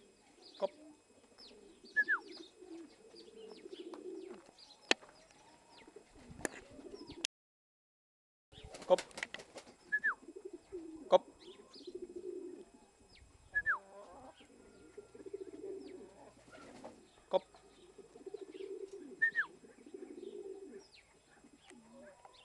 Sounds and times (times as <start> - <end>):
Pigeon, dove: 0.0 - 7.3, 8.6 - 22.4
Chirp, tweet: 0.2 - 0.8, 1.4 - 6.0, 11.4 - 12.0.